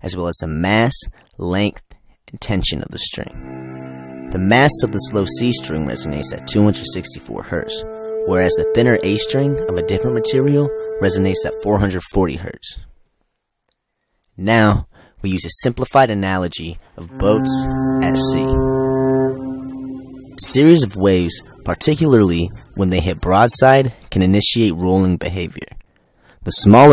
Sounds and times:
Speech: 0:00.0 - 0:03.4, 0:04.3 - 0:12.9, 0:14.4 - 0:18.7, 0:20.4 - 0:25.8, 0:26.4 - 0:26.9
Music: 0:03.3 - 0:11.8, 0:17.0 - 0:23.1.

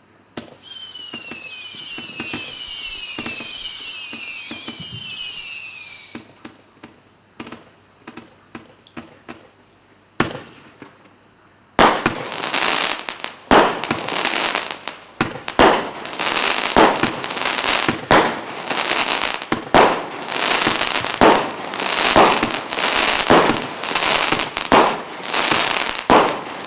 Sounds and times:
Firecracker: 0:00.0 - 0:09.6, 0:10.2 - 0:26.6.

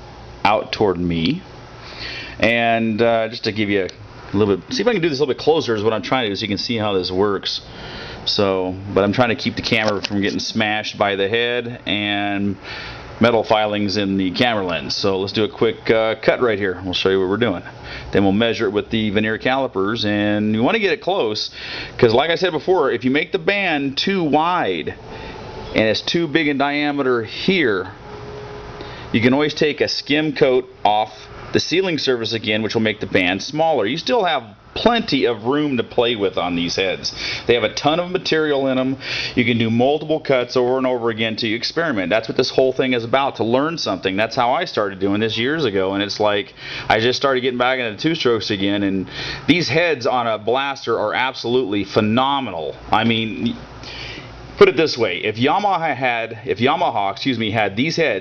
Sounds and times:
Speech: 0:00.4 - 0:01.5, 0:02.4 - 0:07.7, 0:08.3 - 0:12.6, 0:13.2 - 0:25.0, 0:25.7 - 0:28.0, 0:29.1 - 0:53.6, 0:54.6 - 0:58.2.

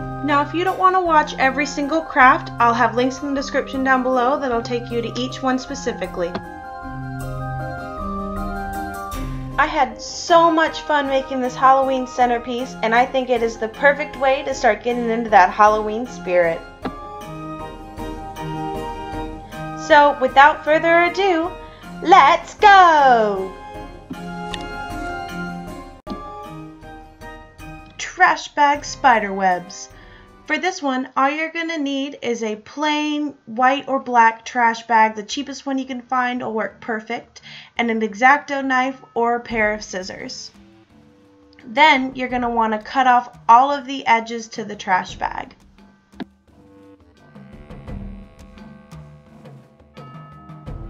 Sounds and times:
Music: 0:00.0 - 0:31.8, 0:35.2 - 0:50.8
Speech: 0:00.2 - 0:06.4, 0:09.6 - 0:16.6, 0:19.8 - 0:23.6, 0:28.0 - 0:29.9, 0:30.5 - 0:40.5, 0:41.6 - 0:45.5.

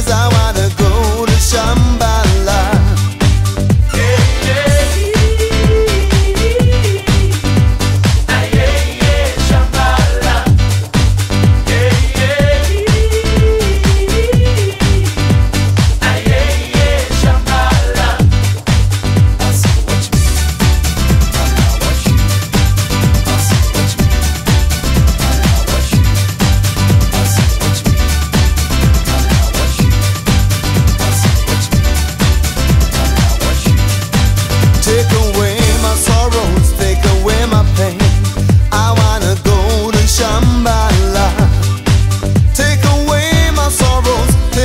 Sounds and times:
Disco: 0:00.0 - 0:44.6.

